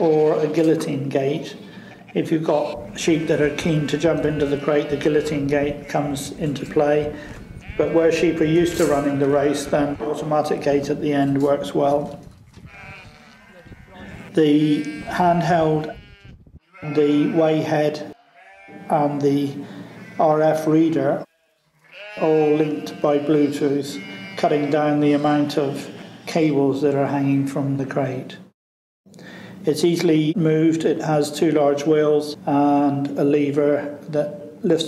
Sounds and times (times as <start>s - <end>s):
Speech: 0.0s - 1.6s, 2.2s - 7.2s, 7.8s - 12.1s, 13.6s - 16.0s, 16.8s - 18.2s, 18.9s - 19.6s, 20.2s - 21.3s, 22.2s - 28.5s, 29.6s - 34.8s
Bleat: 1.8s - 6.2s, 7.2s - 10.3s, 12.6s - 19.0s, 19.9s - 20.4s, 21.2s - 26.4s.